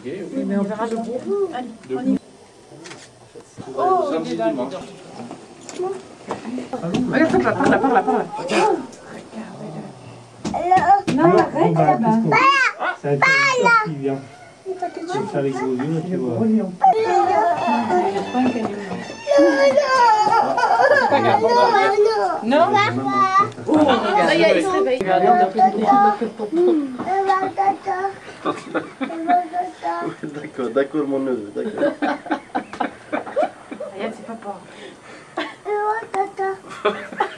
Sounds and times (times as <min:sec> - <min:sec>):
Crying, sobbing: 0:16.8 - 0:18.6, 0:19.2 - 0:22.3.